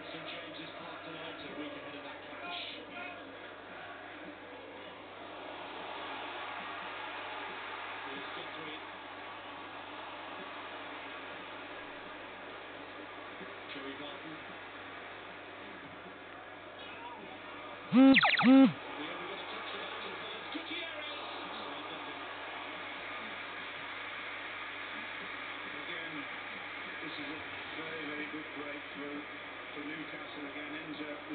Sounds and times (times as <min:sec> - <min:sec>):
Speech: 0:00.0 - 0:05.0, 0:08.1 - 0:08.9, 0:13.7 - 0:14.5, 0:16.8 - 0:22.4, 0:25.6 - 0:31.3.